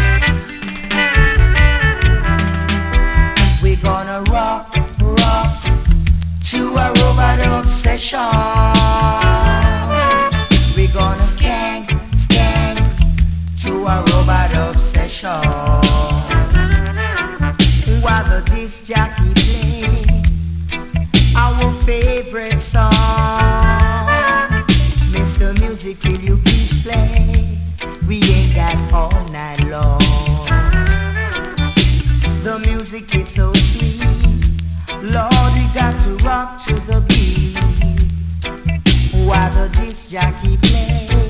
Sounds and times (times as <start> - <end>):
Jingle (music): 0.0 - 5.9, 6.5 - 13.0, 13.6 - 41.3.